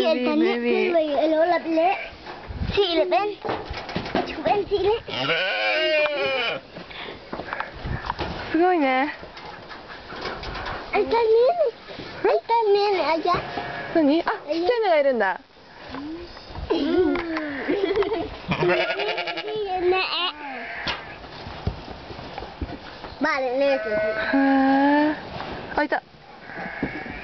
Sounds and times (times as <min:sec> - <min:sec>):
Bleat: 0:05.1 - 0:06.6, 0:17.3 - 0:17.8, 0:18.5 - 0:19.6, 0:20.3 - 0:21.2, 0:23.7 - 0:24.6, 0:26.4 - 0:27.2.